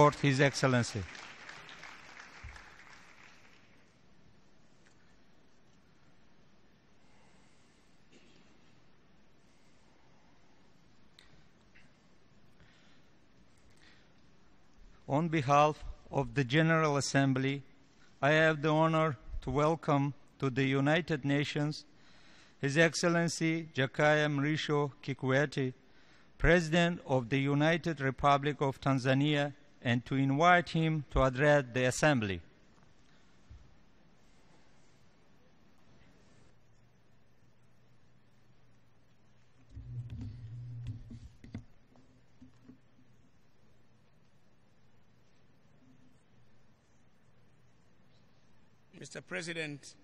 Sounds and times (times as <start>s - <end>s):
Male speech, man speaking: 0.0s - 1.1s, 15.1s - 17.6s, 18.2s - 21.8s, 22.6s - 25.8s, 26.4s - 32.5s, 49.0s - 50.0s
Narration, monologue: 0.0s - 1.6s, 7.0s - 39.6s, 41.4s - 50.0s.